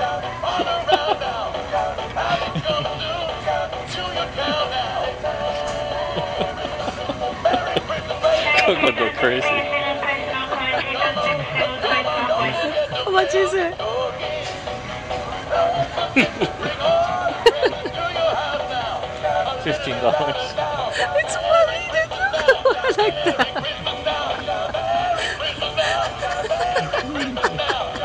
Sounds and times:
Music: 0.0s - 28.0s.

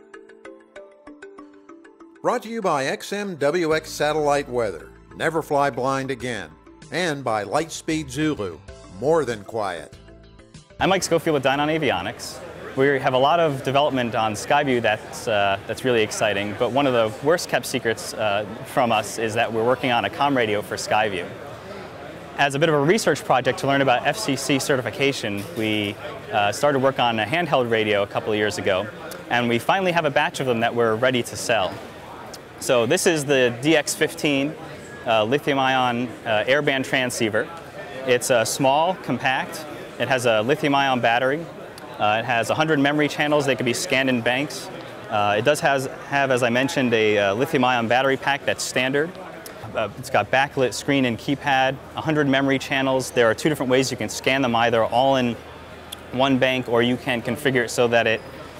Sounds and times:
Speech: 2.3s - 10.0s, 10.8s - 21.3s, 22.4s - 55.4s, 56.0s - 58.3s.

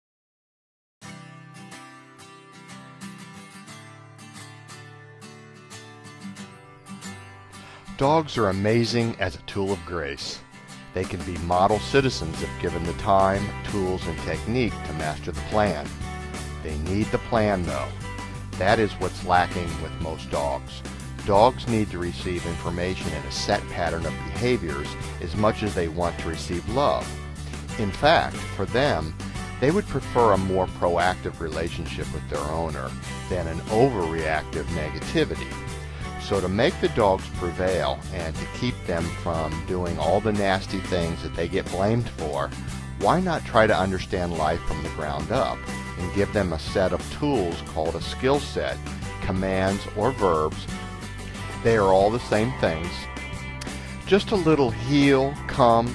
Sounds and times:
Music: 1.0s - 55.9s
Speech: 8.0s - 10.4s, 11.0s - 16.0s, 16.6s - 18.0s, 18.6s - 27.1s, 27.7s - 35.5s, 36.2s - 50.7s, 51.6s - 53.1s, 54.1s - 55.9s.

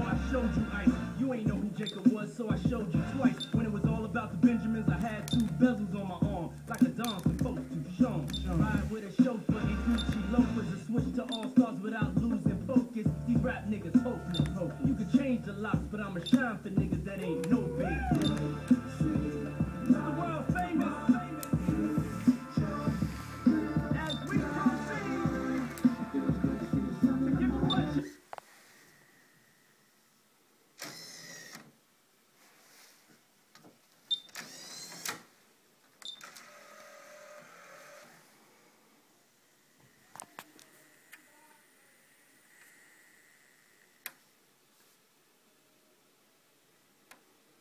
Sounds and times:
Inside, small room: 0.0s - 47.6s.

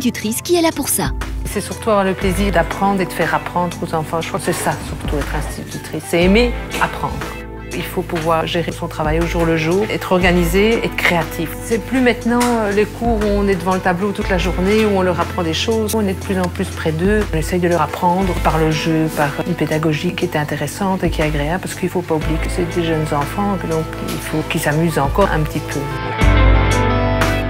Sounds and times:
Speech: 0.0s - 26.0s
Music: 0.0s - 27.4s.

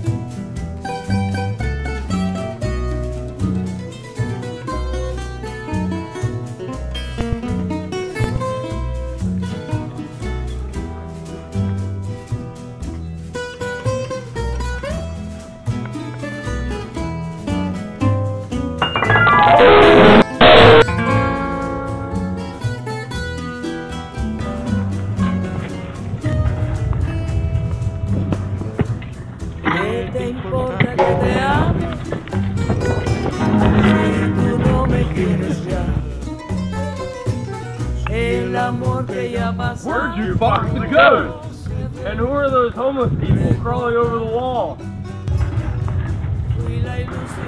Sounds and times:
Pizzicato: 0.0s - 20.9s, 23.2s - 42.0s.

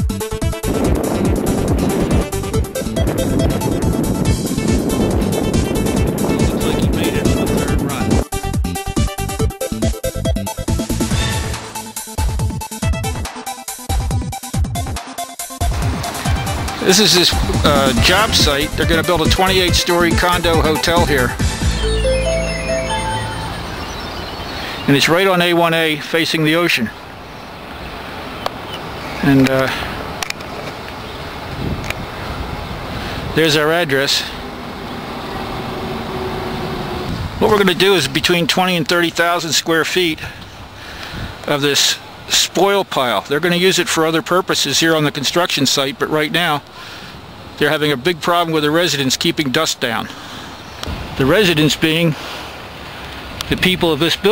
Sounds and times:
Speech: 6.4s - 8.2s, 16.8s - 21.4s, 24.9s - 27.0s, 29.2s - 29.8s, 33.4s - 34.4s, 37.4s - 40.4s, 41.5s - 46.6s, 47.6s - 50.1s, 51.2s - 52.2s, 53.5s - 54.3s.

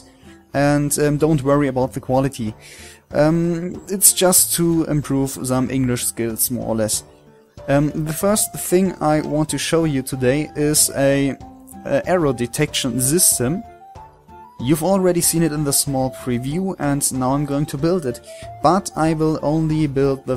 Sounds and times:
Music: 0.0s - 20.3s
Speech: 0.6s - 7.0s, 7.7s - 13.7s, 14.6s - 20.3s.

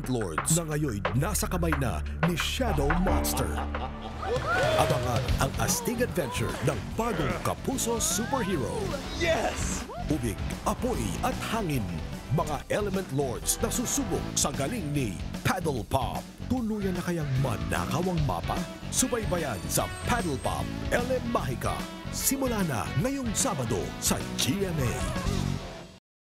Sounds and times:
Speech: 0.0s - 3.6s, 4.8s - 25.3s
Music: 0.0s - 26.0s.

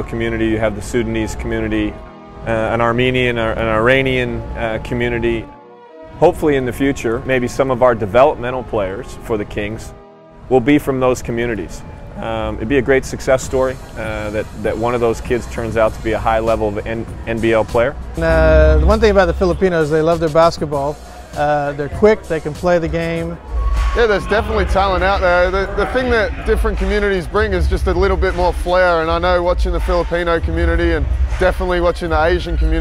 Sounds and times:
Speech: 0.0s - 1.9s, 2.5s - 5.5s, 6.2s - 9.9s, 10.5s - 23.4s, 24.0s - 32.8s
Music: 0.0s - 32.8s.

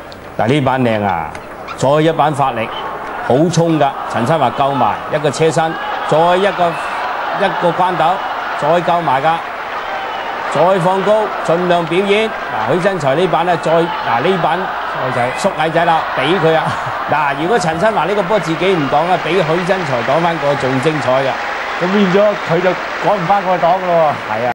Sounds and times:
Speech: 0.4s - 2.7s, 3.3s - 6.8s, 7.4s - 9.4s, 10.6s - 24.5s.

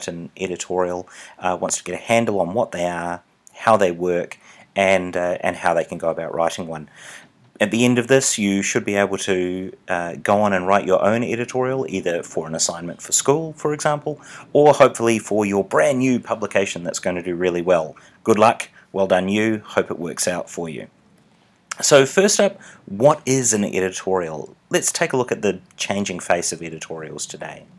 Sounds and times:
Speech: 0.0s - 6.9s, 7.6s - 20.9s, 21.7s - 27.7s.

